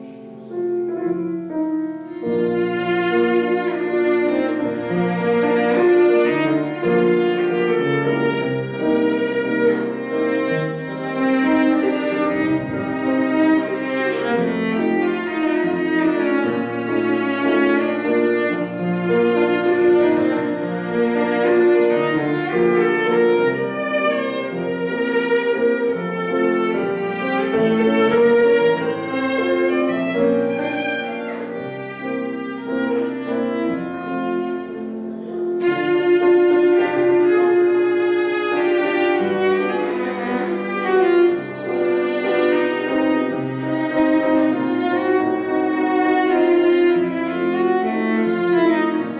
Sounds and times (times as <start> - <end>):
Cello: 0.0 - 49.1
Piano: 0.0 - 49.1.